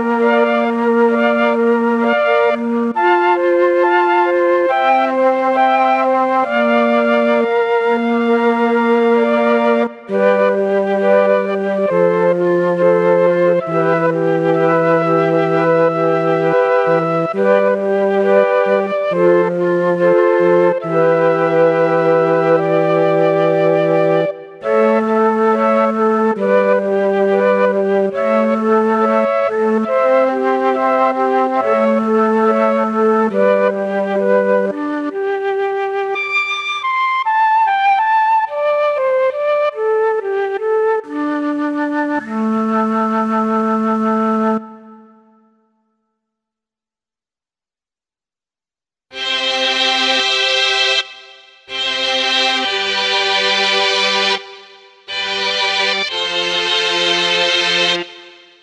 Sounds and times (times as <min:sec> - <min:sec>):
Music: 0:00.0 - 0:46.5, 0:49.1 - 0:58.6.